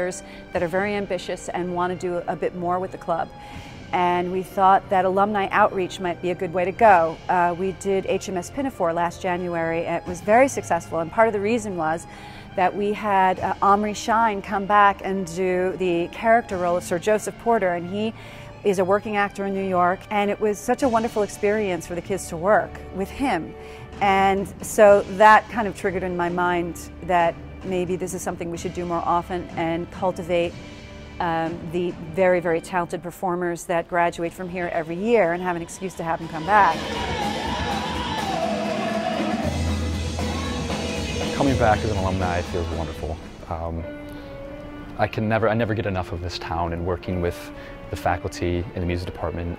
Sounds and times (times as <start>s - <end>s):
Music: 0.0s - 49.5s.